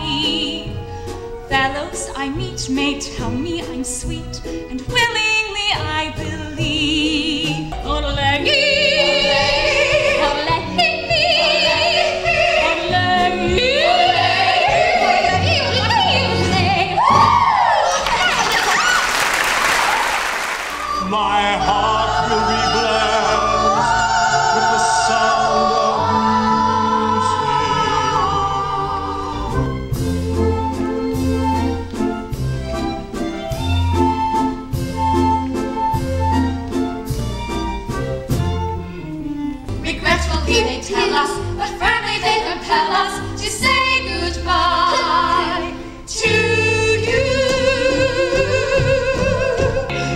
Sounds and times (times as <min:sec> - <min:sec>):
Funny music: 0:00.0 - 0:50.1.